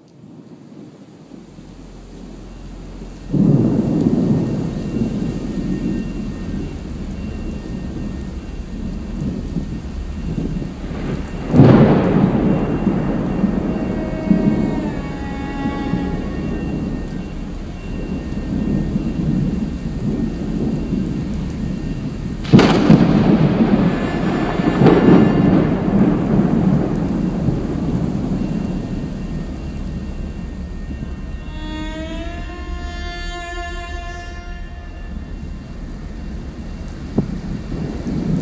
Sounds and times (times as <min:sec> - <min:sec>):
Raindrop: 0:00.0 - 0:38.4
Thunder: 0:00.0 - 0:38.4.